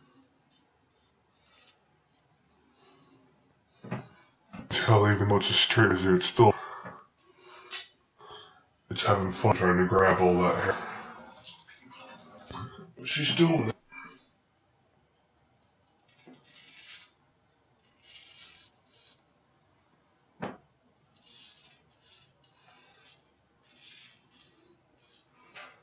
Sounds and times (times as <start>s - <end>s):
Speech: 4.6s - 6.8s, 8.9s - 11.2s, 11.9s - 13.8s.